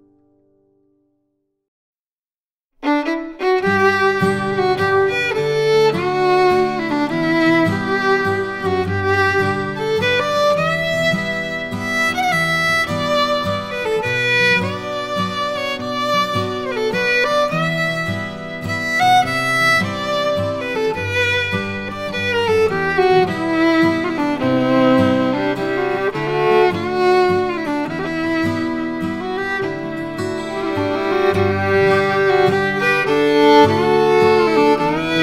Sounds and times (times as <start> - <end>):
Violin, fiddle: 2.8 - 35.2.